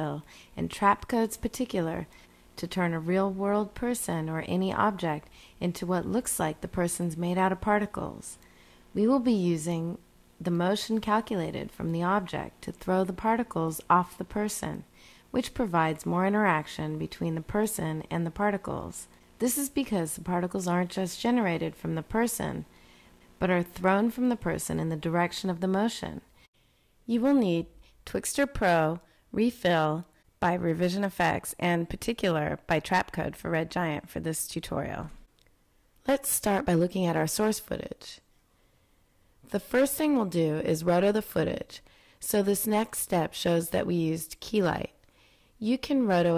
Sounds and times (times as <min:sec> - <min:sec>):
Speech: 0:00.0 - 0:08.4, 0:09.0 - 0:22.7, 0:23.4 - 0:26.3, 0:27.1 - 0:35.2, 0:36.0 - 0:38.2, 0:39.5 - 0:45.0, 0:45.6 - 0:46.3.